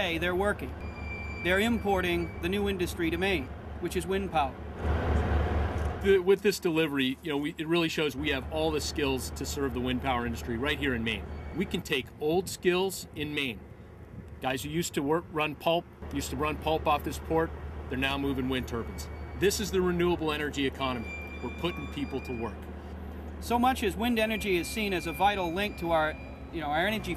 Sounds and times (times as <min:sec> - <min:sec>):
Speech: 0:00.0 - 0:00.7, 0:01.4 - 0:04.6, 0:06.0 - 0:13.6, 0:14.4 - 0:22.6, 0:23.4 - 0:27.1.